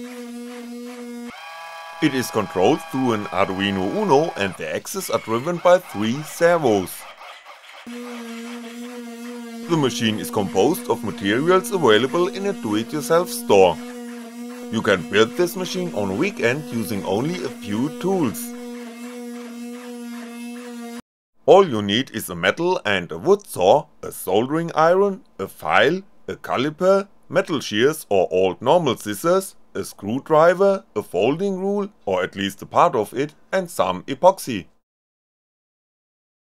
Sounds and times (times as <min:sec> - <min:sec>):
Speech: 0:02.0 - 0:07.0, 0:09.7 - 0:13.8, 0:14.7 - 0:18.6, 0:21.5 - 0:34.8.